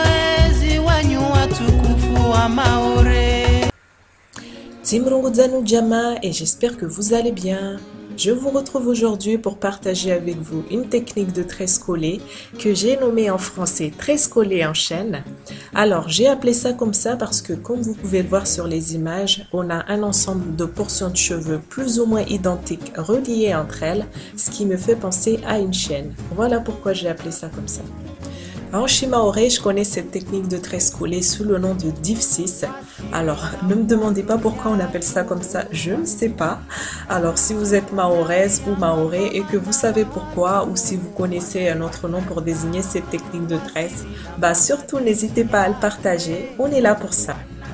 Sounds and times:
Music: 0.0s - 3.8s, 4.4s - 47.7s
Speech: 4.8s - 27.9s, 28.7s - 47.5s.

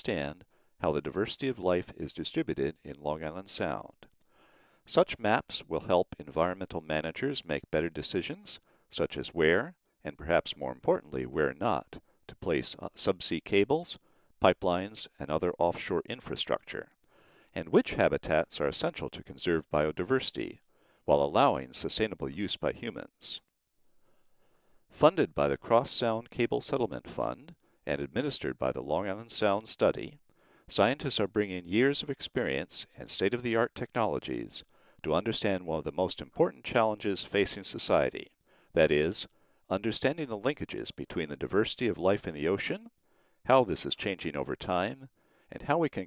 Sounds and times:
Speech: 0.0s - 4.1s, 4.9s - 17.0s, 17.6s - 23.5s, 25.0s - 46.0s.

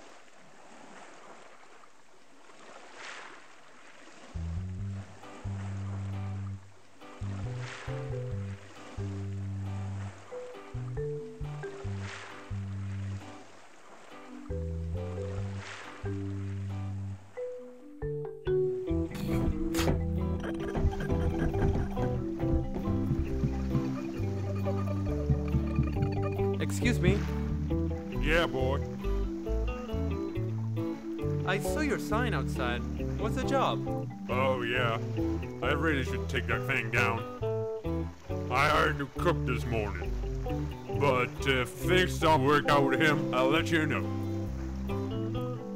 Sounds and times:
Music: 4.4s - 13.4s, 14.1s - 45.7s
Speech: 26.6s - 27.2s, 28.2s - 28.8s, 31.5s - 35.0s, 35.6s - 37.3s, 38.5s - 40.1s, 41.0s - 44.1s.

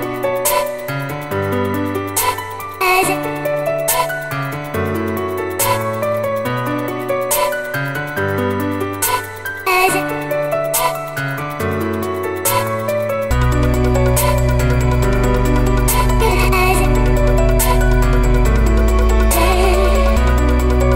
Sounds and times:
Dubstep: 7.3s - 7.8s, 12.5s - 20.9s.

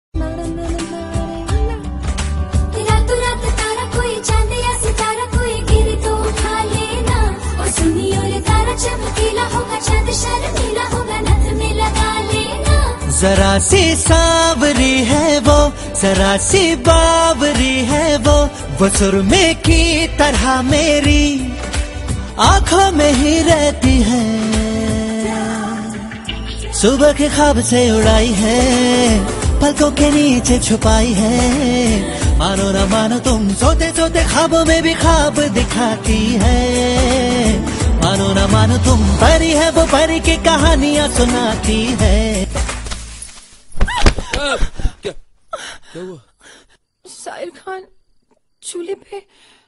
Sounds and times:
Music of Bollywood: 0.2s - 45.0s
Singing: 2.8s - 42.6s.

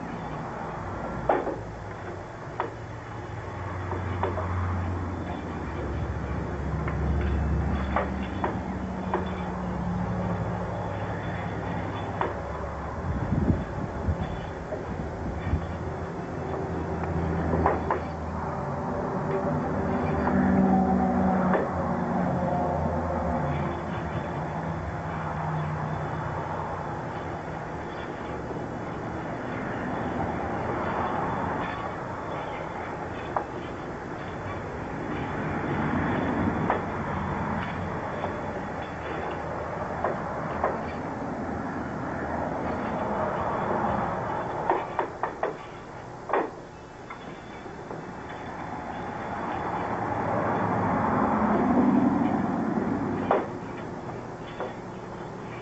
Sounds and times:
Field recording: 0.0s - 55.6s.

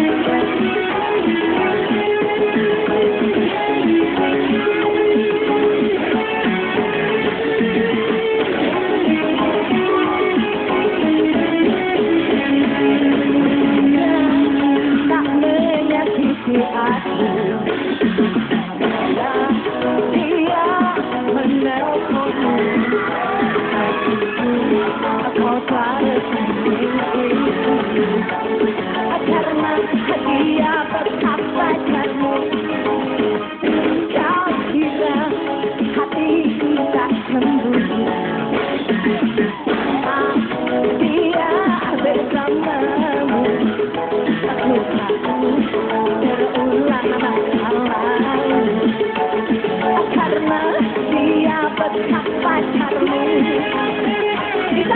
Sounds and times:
Music of Asia: 0.0s - 54.9s.

